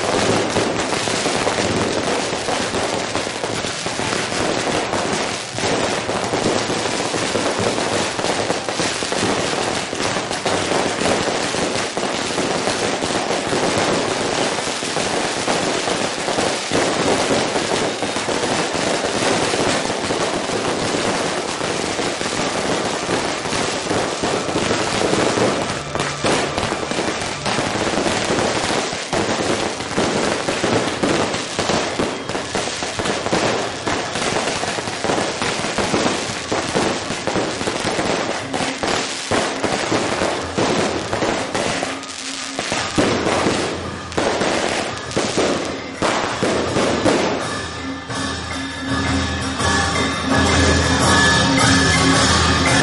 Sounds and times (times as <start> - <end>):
Fireworks: 0.0 - 52.8.